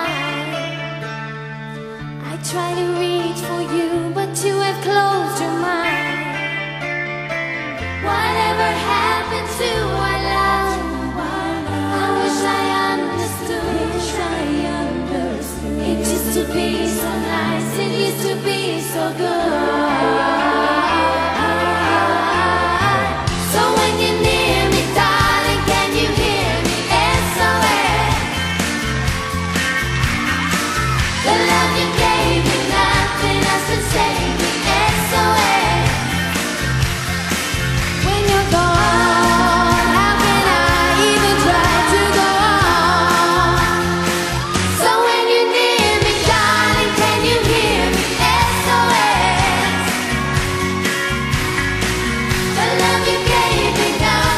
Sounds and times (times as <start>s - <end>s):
Pop music: 0.0s - 54.3s
Singing: 31.2s - 36.3s, 38.0s - 50.2s, 52.6s - 54.3s.